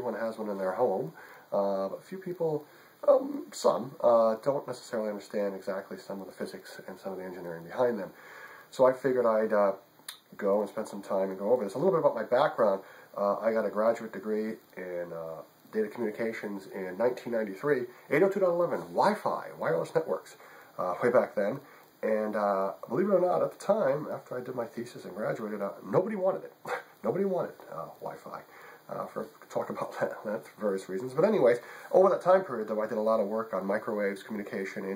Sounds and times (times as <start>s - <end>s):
Speech: 0.0s - 34.9s.